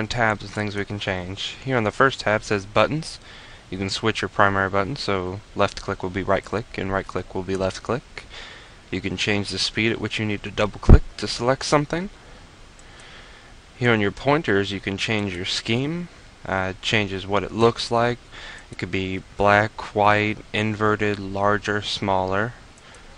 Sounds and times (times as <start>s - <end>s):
Speech: 0.0s - 8.3s, 8.9s - 12.2s, 13.8s - 22.6s.